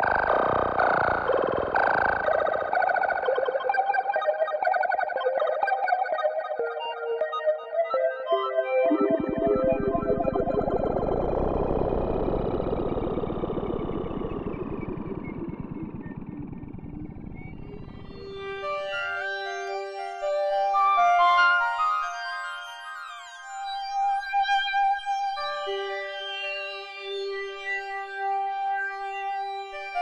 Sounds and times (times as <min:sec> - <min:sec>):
Synthesizer: 0:00.0 - 0:30.0.